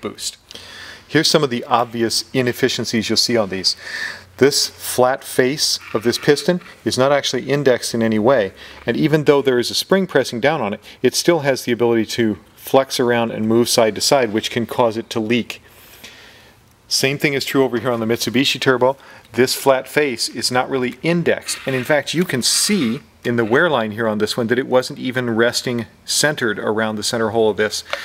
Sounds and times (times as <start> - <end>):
Speech: 0.0 - 0.4, 1.1 - 3.8, 4.4 - 15.6, 16.9 - 28.0.